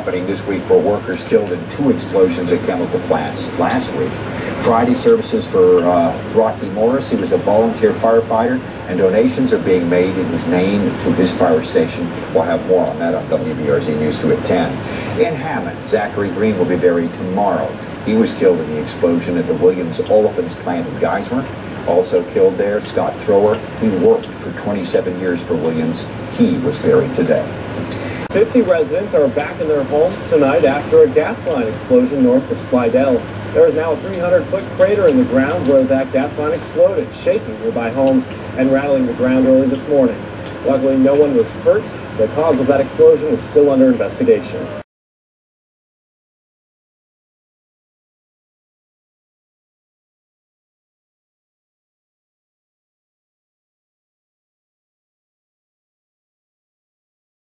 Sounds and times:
Speech: 0.0 - 44.9.

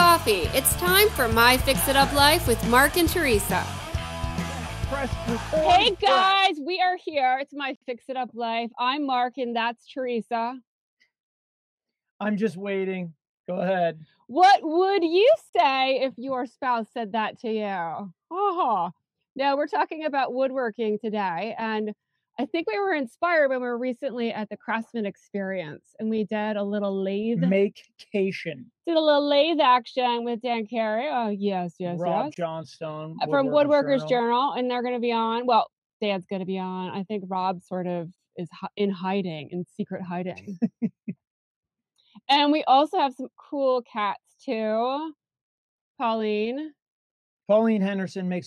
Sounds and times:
Speech: 0.0 - 3.7, 4.9 - 10.6, 12.2 - 41.1, 42.3 - 45.1, 46.0 - 46.7, 47.5 - 48.4.

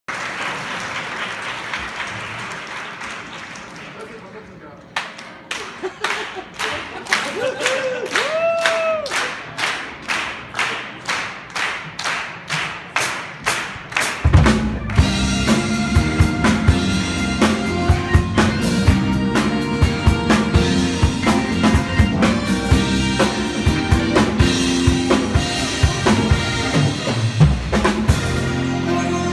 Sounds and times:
Speech: 3.8 - 5.0.

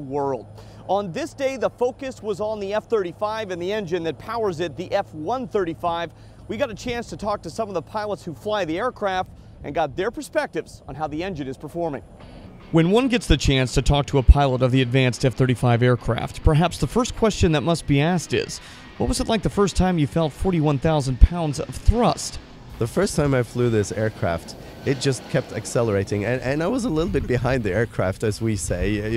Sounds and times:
Speech: 0.0 - 12.0, 12.8 - 29.1
Aircraft: 0.0 - 29.1
Heavy engine (low frequency): 0.0 - 29.1.

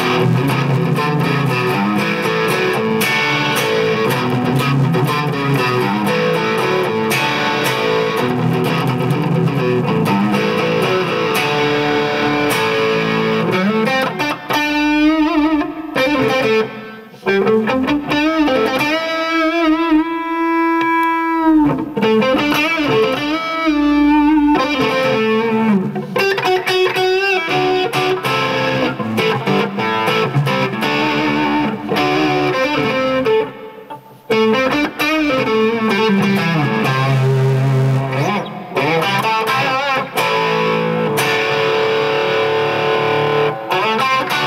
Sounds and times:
Music: 0.0 - 44.4.

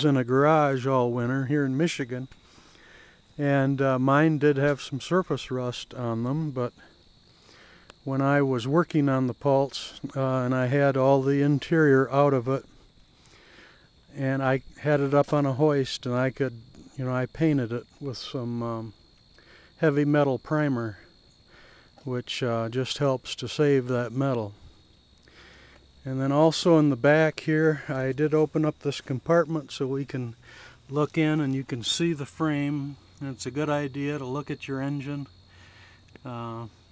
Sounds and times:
Speech: 0.0 - 2.3, 3.4 - 6.9, 8.0 - 12.7, 14.1 - 19.0, 19.8 - 21.1, 22.0 - 24.6, 26.0 - 35.3, 36.2 - 36.7.

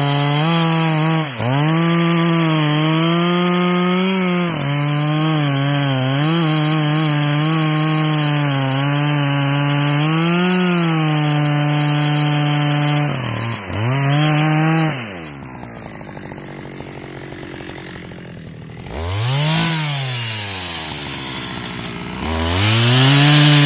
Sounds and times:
Chainsaw: 0.0 - 23.6.

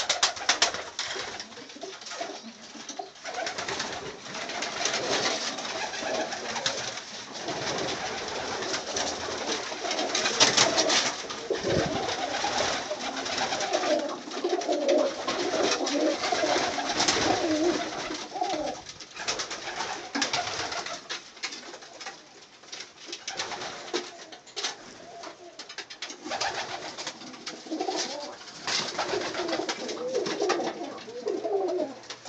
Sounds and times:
Pigeon, dove: 0.0 - 22.3, 23.2 - 32.2
Inside, small room: 0.0 - 32.2.

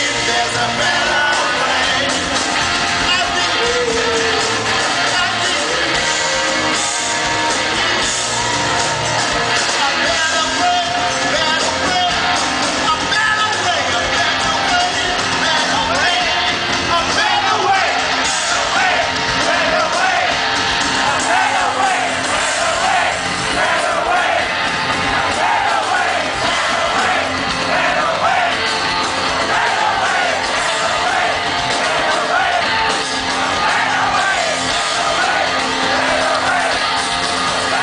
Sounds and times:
Psychedelic rock: 0.0 - 37.8.

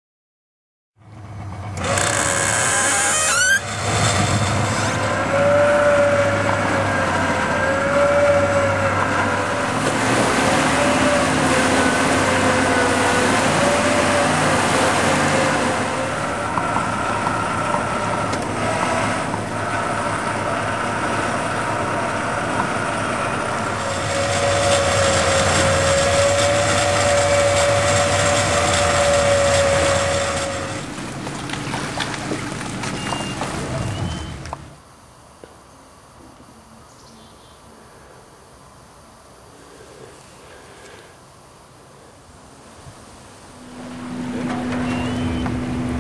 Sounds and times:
Motorboat, speedboat: 1.2 - 34.7, 43.6 - 46.0.

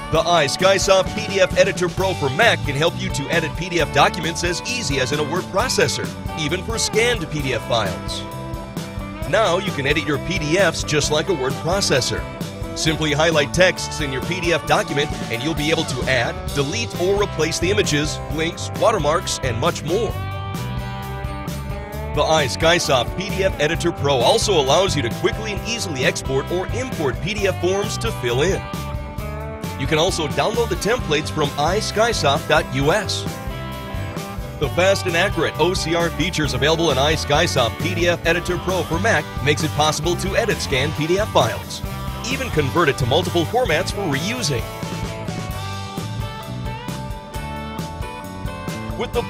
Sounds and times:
Music: 0.0 - 49.3
Speech: 0.1 - 8.3, 9.2 - 20.2, 22.2 - 28.6, 29.8 - 33.3, 34.6 - 44.7, 49.0 - 49.3.

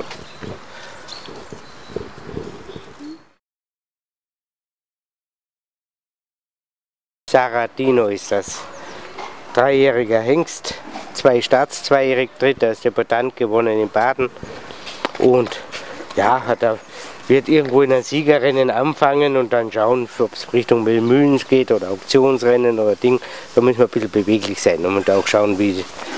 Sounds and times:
Speech: 7.3 - 8.7, 9.5 - 14.4, 15.2 - 26.1.

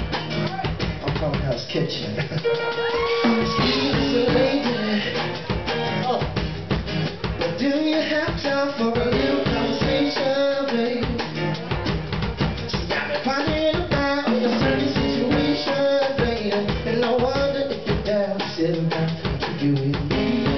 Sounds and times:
Music: 0.0 - 20.5
Male singing: 3.6 - 5.4, 7.4 - 11.3, 12.7 - 20.5.

